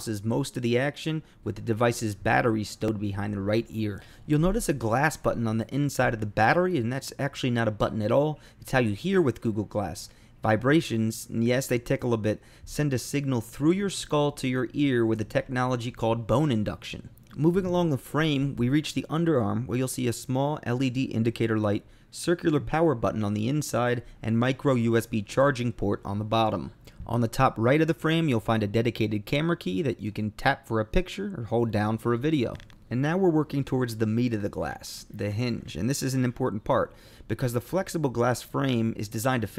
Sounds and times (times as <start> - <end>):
Speech: 0.0 - 39.5.